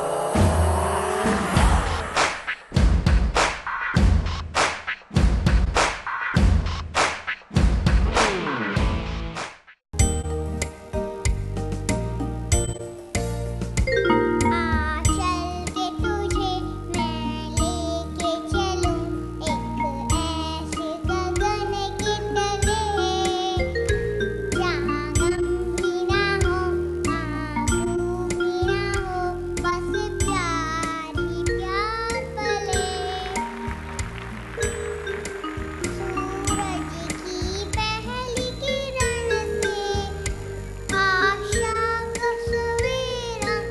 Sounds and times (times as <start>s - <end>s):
Music: 0.0s - 43.7s
Child singing: 14.4s - 33.6s, 35.9s - 43.7s.